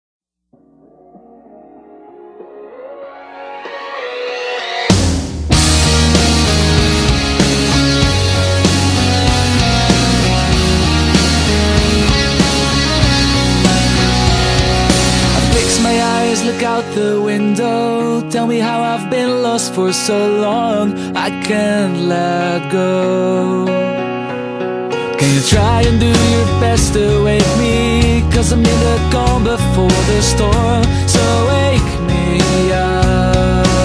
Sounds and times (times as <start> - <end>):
Ambient music: 0.6 - 19.4.